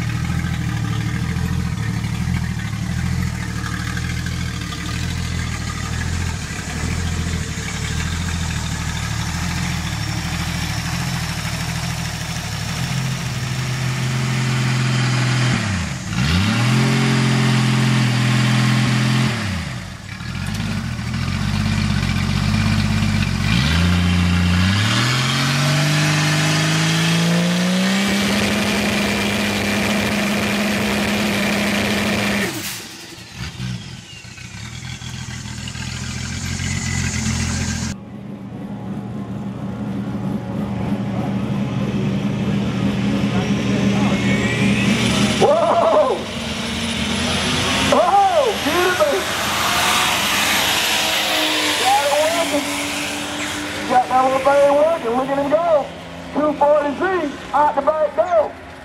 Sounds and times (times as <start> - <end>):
Motor vehicle (road): 0.0 - 58.8.